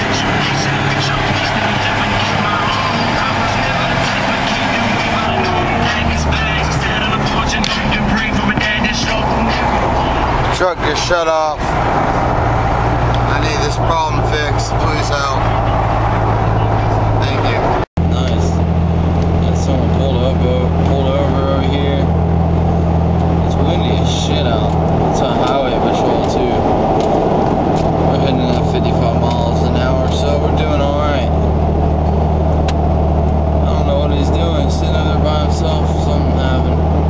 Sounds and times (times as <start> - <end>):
Speech: 0.0 - 11.7, 13.3 - 15.8, 16.4 - 18.6, 19.4 - 22.1, 23.4 - 26.6, 28.1 - 31.4, 33.6 - 36.8
Music: 0.4 - 10.4.